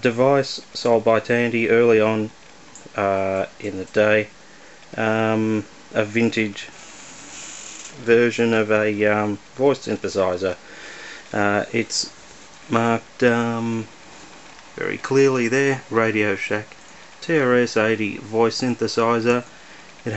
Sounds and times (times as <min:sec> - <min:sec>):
Speech: 0:00.0 - 0:02.3, 0:02.9 - 0:04.3, 0:05.0 - 0:06.7, 0:08.0 - 0:10.6, 0:11.3 - 0:12.1, 0:12.7 - 0:13.9, 0:14.8 - 0:19.5.